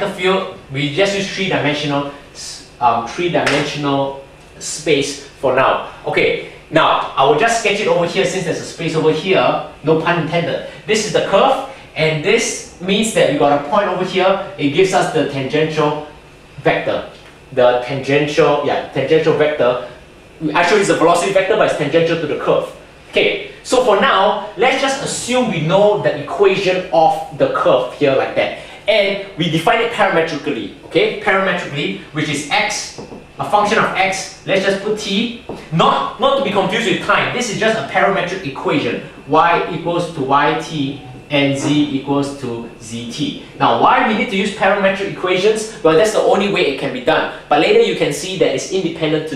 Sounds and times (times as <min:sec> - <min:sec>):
Speech: 0:00.0 - 0:49.3.